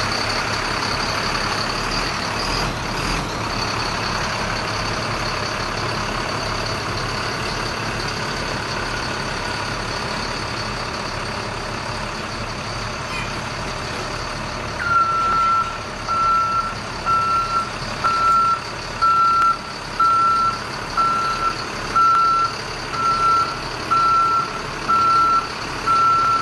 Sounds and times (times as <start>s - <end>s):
Vehicle: 0.0s - 26.4s.